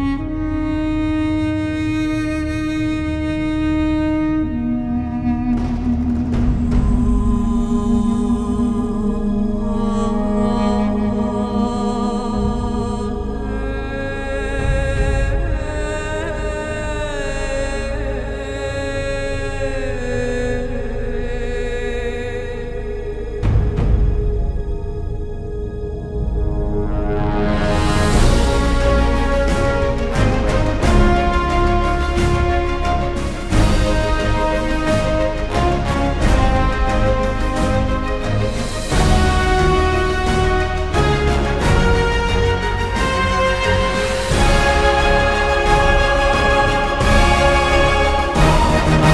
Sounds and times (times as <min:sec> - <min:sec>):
Music: 0:00.0 - 0:49.1.